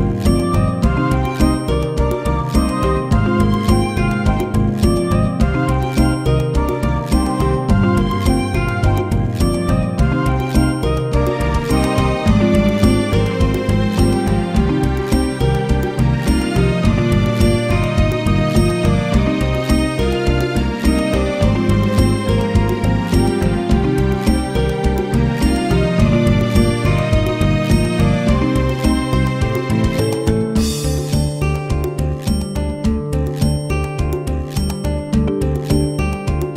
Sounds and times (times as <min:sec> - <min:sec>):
Music: 0:00.0 - 0:36.5.